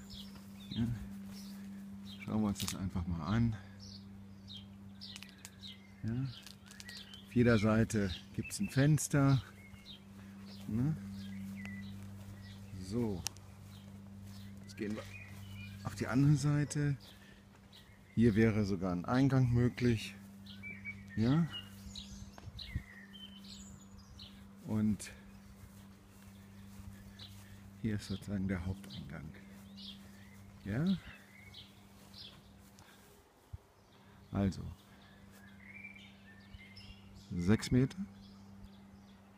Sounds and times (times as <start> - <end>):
Speech: 2.2 - 3.7, 6.0 - 6.4, 7.3 - 9.5, 10.7 - 11.0, 12.7 - 13.3, 14.7 - 15.2, 15.8 - 17.0, 18.2 - 20.2, 21.2 - 21.6, 24.6 - 25.2, 27.8 - 29.4, 30.6 - 31.1, 34.3 - 34.8, 37.3 - 38.1.